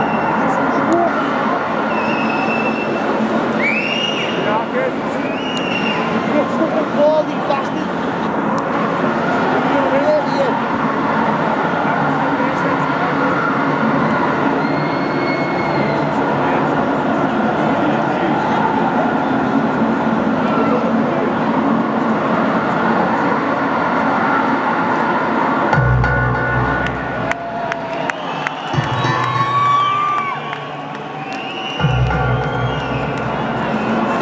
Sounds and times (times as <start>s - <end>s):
Echo: 25.7s - 34.2s
Music: 25.8s - 27.8s, 28.6s - 34.2s.